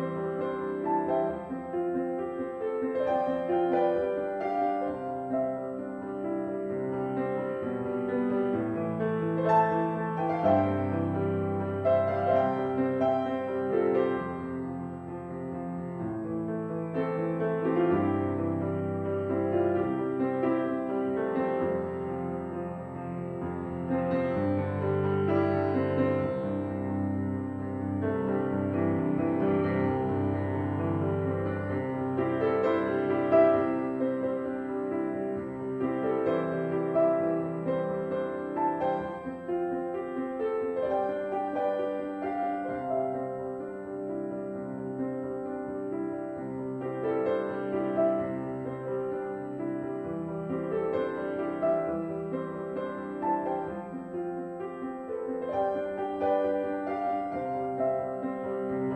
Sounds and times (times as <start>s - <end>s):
Music: 0.0s - 58.9s.